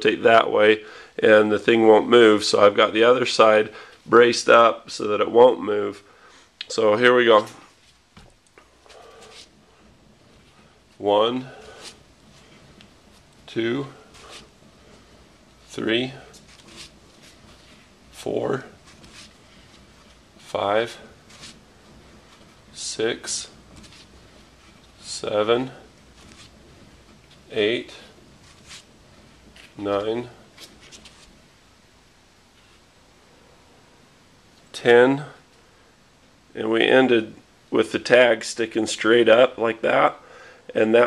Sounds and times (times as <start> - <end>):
Speech: 0.0 - 7.7, 11.0 - 11.7, 13.5 - 14.0, 15.7 - 16.3, 18.2 - 18.7, 20.5 - 21.1, 22.7 - 23.6, 25.0 - 25.8, 27.5 - 28.2, 29.8 - 30.4, 34.7 - 35.4, 36.6 - 41.0
Inside, small room: 0.0 - 41.0.